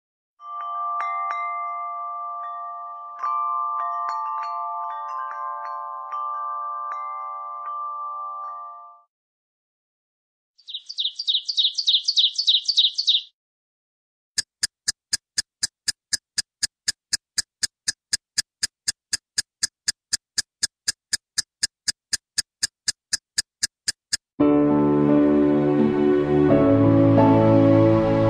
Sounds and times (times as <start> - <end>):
Music: 0.4 - 9.1, 24.4 - 28.2.